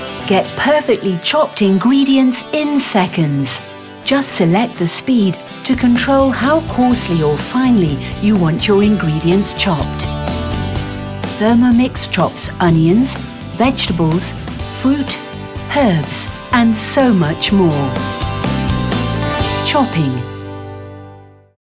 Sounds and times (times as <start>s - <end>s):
Music: 0.0s - 21.6s
Speech: 0.3s - 10.1s, 11.3s - 18.0s, 19.6s - 20.3s.